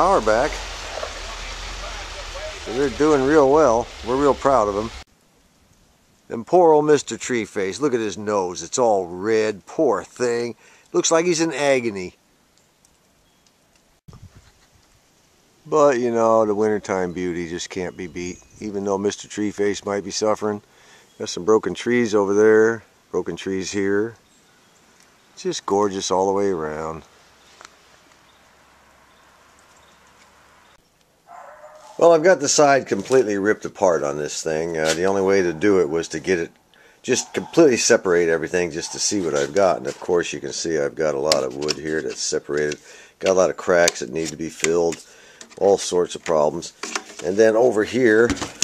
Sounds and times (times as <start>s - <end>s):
Speech: 0.0s - 5.0s, 6.3s - 12.2s, 15.7s - 20.6s, 21.2s - 24.2s, 25.4s - 27.0s, 32.0s - 45.0s, 45.6s - 48.5s.